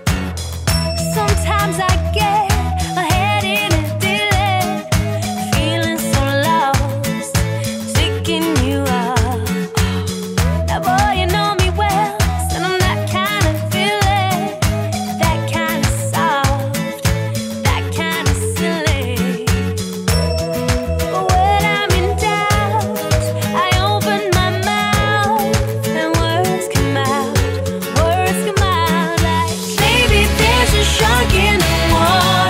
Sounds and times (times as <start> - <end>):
Music: 0.0 - 32.4.